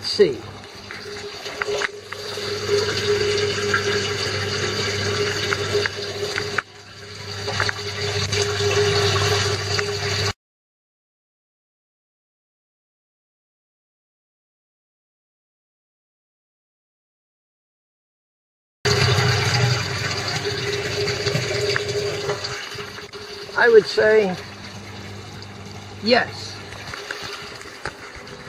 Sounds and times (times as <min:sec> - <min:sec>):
Speech: 0:00.0 - 0:00.4, 0:23.6 - 0:24.4, 0:26.0 - 0:26.6.